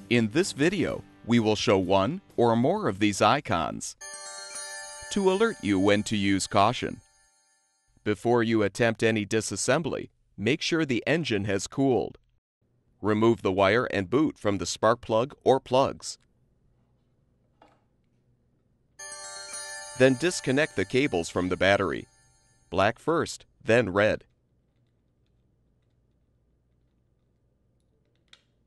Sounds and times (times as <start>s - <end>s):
Music: 0.0s - 8.0s, 19.0s - 22.8s
Speech: 0.1s - 4.0s, 5.2s - 7.0s, 8.1s - 12.2s, 13.0s - 16.2s, 20.0s - 22.1s, 22.8s - 24.3s.